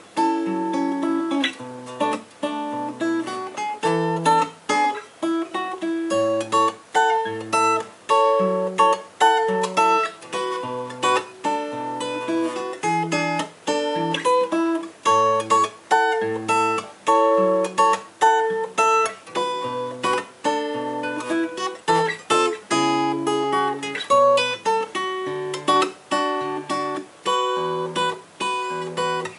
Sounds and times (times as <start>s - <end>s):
Acoustic guitar: 0.0s - 29.3s.